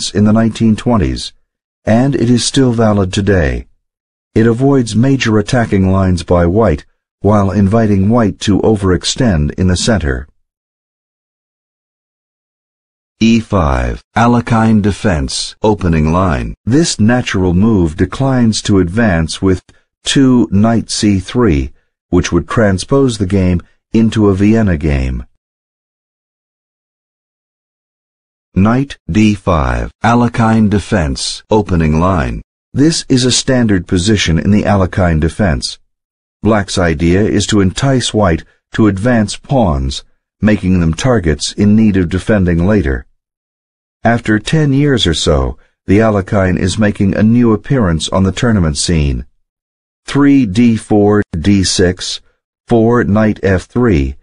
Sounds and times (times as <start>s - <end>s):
Speech: 0.0s - 3.8s, 4.4s - 10.4s, 13.2s - 25.4s, 28.6s - 35.8s, 36.4s - 43.1s, 44.0s - 49.4s, 50.1s - 54.2s.